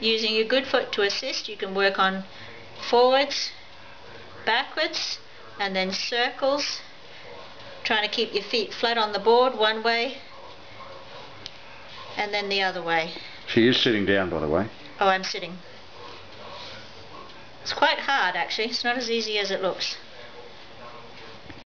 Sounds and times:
Speech: 0:00.0 - 0:06.9, 0:17.7 - 0:20.0.

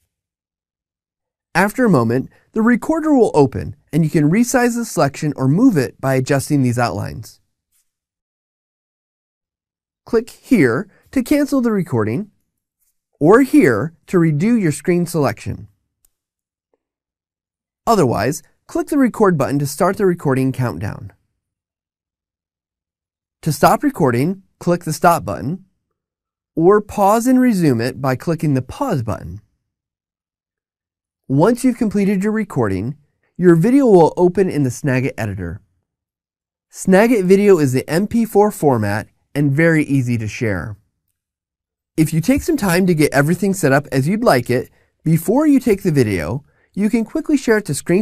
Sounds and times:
Narration, monologue: 0:01.3 - 0:08.1, 0:10.0 - 0:16.6, 0:17.8 - 0:21.6, 0:23.4 - 0:29.8, 0:31.2 - 0:48.0.

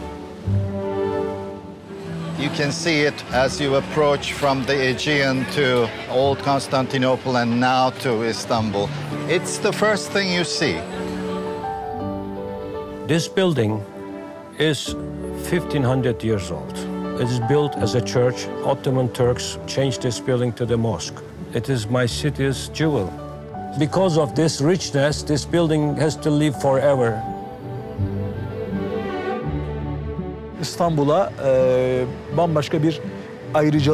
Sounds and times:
Music: 0:00.0 - 0:33.9
Speech: 0:02.4 - 0:10.9, 0:13.1 - 0:13.8, 0:14.6 - 0:23.1, 0:23.8 - 0:27.2, 0:30.6 - 0:33.0, 0:33.6 - 0:33.9.

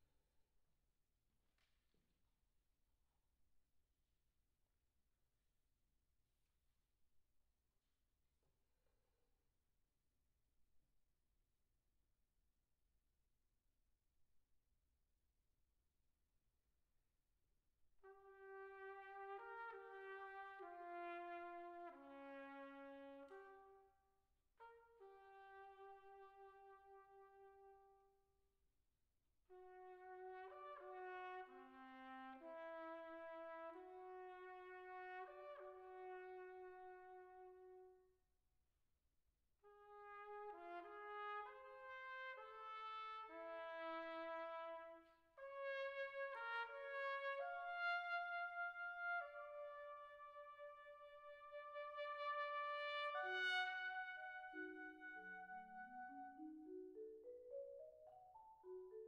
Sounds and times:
Trumpet: 0:18.0 - 0:28.2, 0:29.5 - 0:38.1, 0:39.6 - 0:56.5.

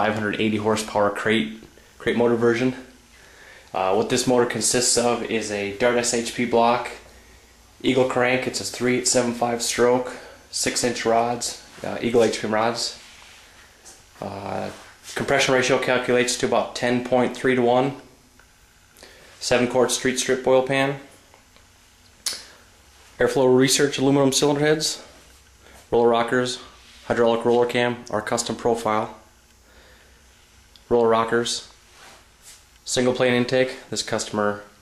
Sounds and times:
Speech: 0:00.0 - 0:03.0, 0:03.7 - 0:07.1, 0:07.8 - 0:13.0, 0:14.2 - 0:18.1, 0:19.4 - 0:21.1, 0:23.2 - 0:25.2, 0:25.9 - 0:29.3, 0:30.8 - 0:31.8, 0:32.8 - 0:34.8.

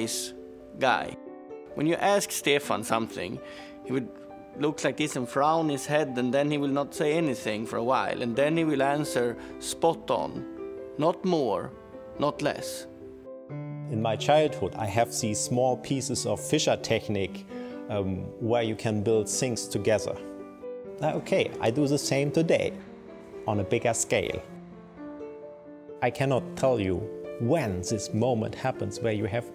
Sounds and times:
Speech: 0:00.0 - 0:01.2, 0:01.8 - 0:10.4, 0:11.0 - 0:12.9, 0:13.9 - 0:20.3, 0:21.0 - 0:22.8, 0:23.5 - 0:24.5, 0:26.0 - 0:29.5
Music: 0:00.0 - 0:29.5.

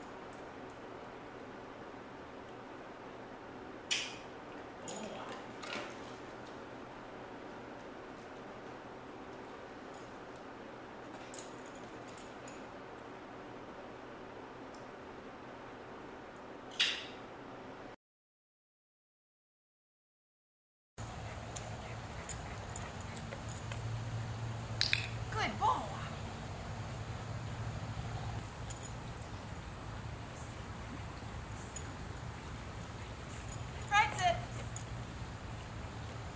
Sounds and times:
Speech: 0:04.9 - 0:05.5, 0:25.3 - 0:26.1, 0:33.9 - 0:34.6
Outside, rural or natural: 0:21.0 - 0:36.3.

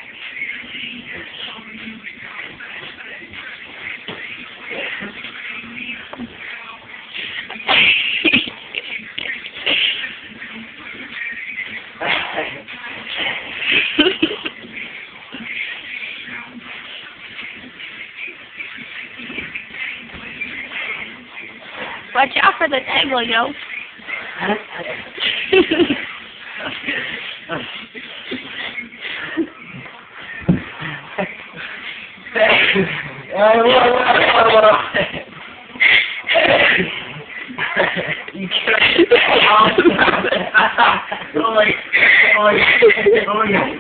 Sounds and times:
Music: 0:00.0 - 0:25.3.

